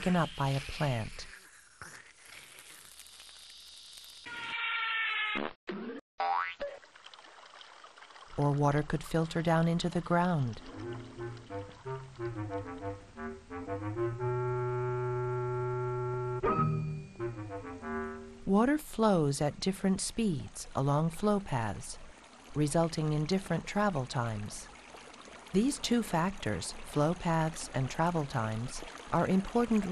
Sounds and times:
Speech: 0:00.0 - 0:01.3, 0:08.4 - 0:10.6, 0:18.5 - 0:22.0, 0:22.6 - 0:24.7, 0:25.6 - 0:29.9
Water: 0:00.0 - 0:04.8, 0:06.5 - 0:16.1, 0:17.8 - 0:29.9
Music: 0:10.7 - 0:18.5.

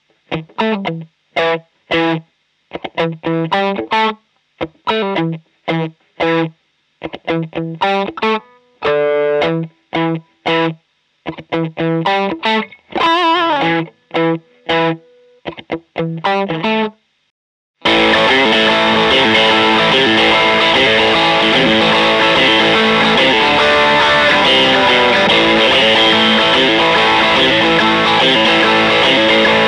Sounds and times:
Electric guitar: 0:00.0 - 0:17.0, 0:17.8 - 0:29.6.

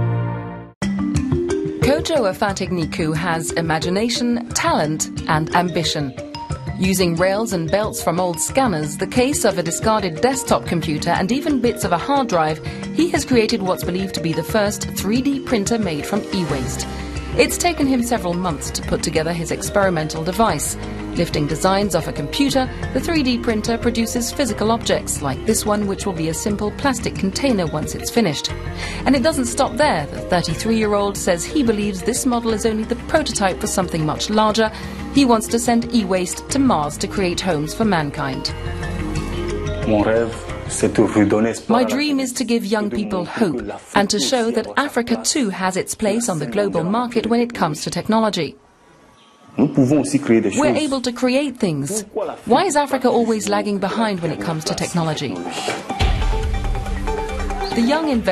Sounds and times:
Music: 0:00.0 - 0:48.6, 0:49.7 - 0:58.3
Speech: 0:01.8 - 0:06.1, 0:06.8 - 0:16.8, 0:17.4 - 0:38.5, 0:39.9 - 0:48.6, 0:49.6 - 0:55.8, 0:57.8 - 0:58.3.

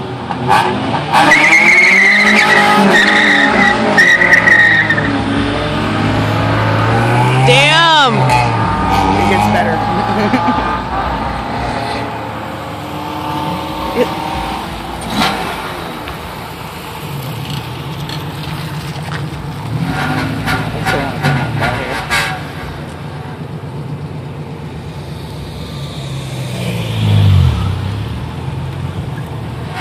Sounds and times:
Car: 0:00.0 - 0:29.8.

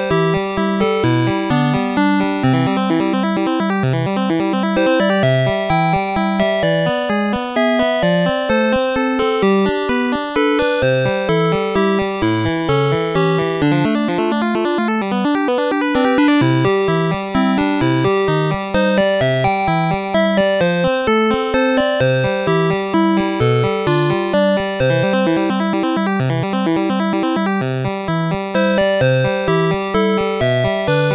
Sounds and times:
Music: 0:00.0 - 0:31.1.

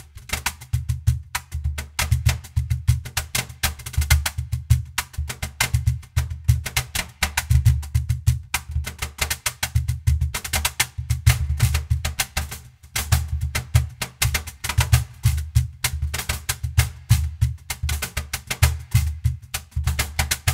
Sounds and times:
Music: 0:00.0 - 0:20.5.

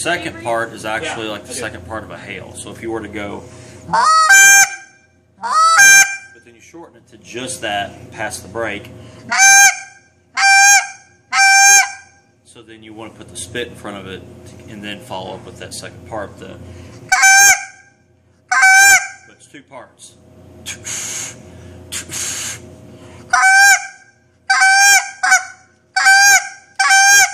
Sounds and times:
Speech: 0:06.4 - 0:08.9, 0:12.5 - 0:16.6, 0:19.3 - 0:20.2.

